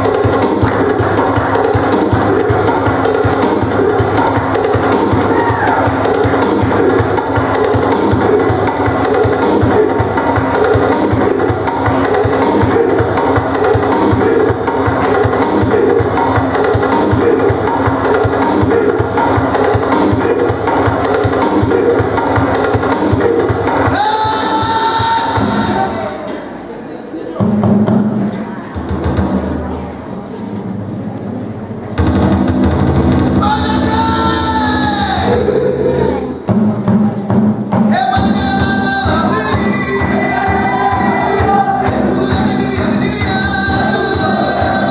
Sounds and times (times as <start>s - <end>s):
Choir: 38.0s - 44.9s.